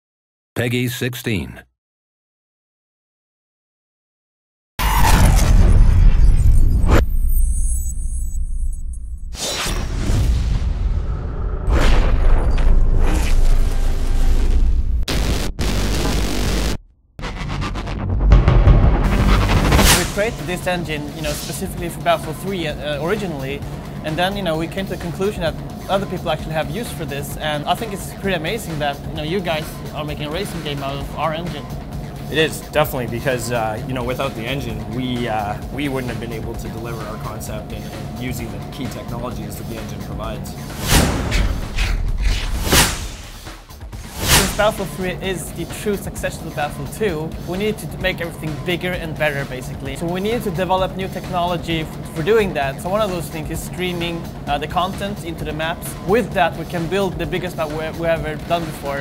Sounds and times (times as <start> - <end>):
Speech: 0.6 - 1.7, 20.0 - 31.7, 32.3 - 40.6, 44.4 - 59.0
Music: 12.4 - 59.0.